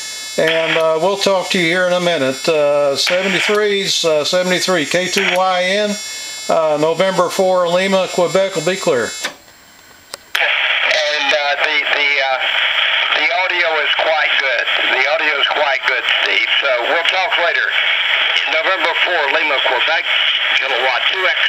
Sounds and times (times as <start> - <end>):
Radio: 0.0 - 9.4, 10.3 - 21.4
Speech: 0.4 - 9.2, 10.4 - 12.5, 13.1 - 21.4.